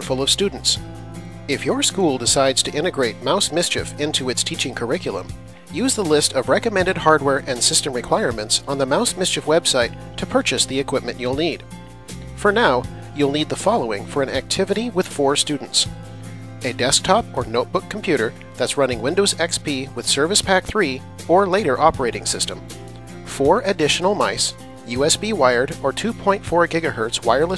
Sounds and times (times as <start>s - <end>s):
Speech: 0.0s - 0.8s, 1.5s - 11.6s, 12.4s - 15.9s, 16.6s - 22.6s, 23.3s - 27.5s
Music: 0.0s - 27.5s.